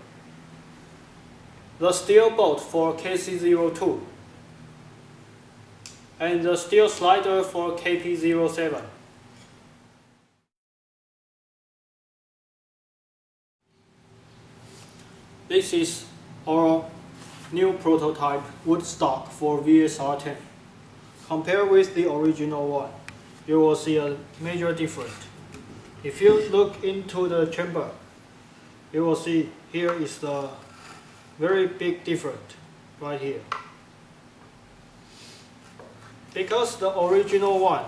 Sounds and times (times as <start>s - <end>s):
Speech: 1.8s - 4.2s, 6.2s - 9.0s, 15.5s - 20.5s, 21.3s - 25.3s, 26.0s - 28.0s, 28.9s - 30.6s, 31.4s - 33.5s, 36.4s - 37.8s.